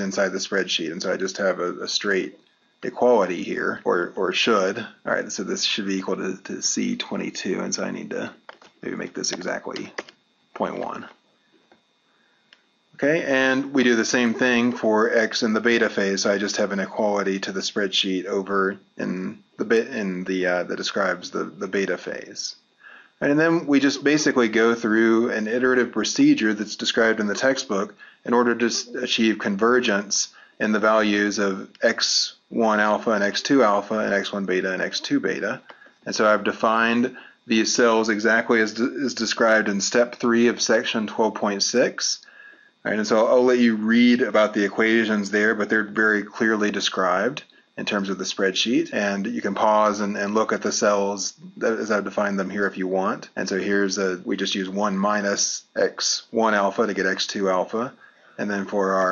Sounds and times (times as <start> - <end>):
Speech: 0.0 - 11.2, 13.0 - 22.6, 23.2 - 59.1.